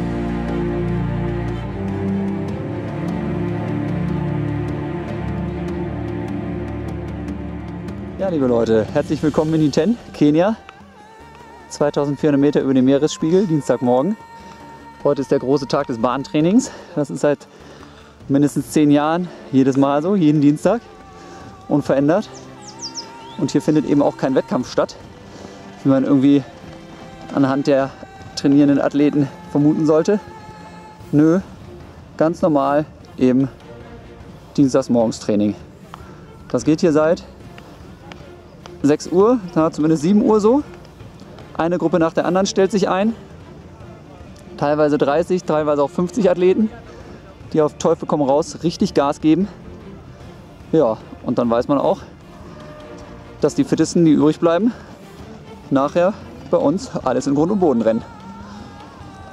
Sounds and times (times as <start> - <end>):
Music: 0.0 - 59.3.